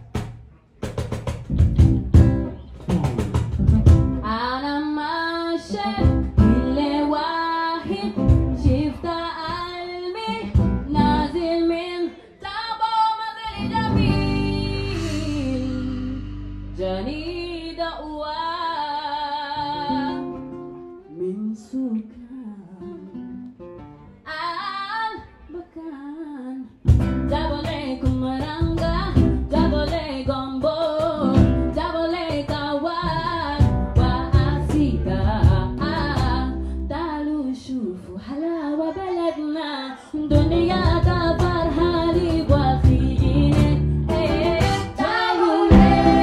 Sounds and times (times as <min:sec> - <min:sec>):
Music: 0:00.0 - 0:12.0, 0:13.4 - 0:25.8, 0:26.7 - 0:37.4, 0:40.3 - 0:46.2.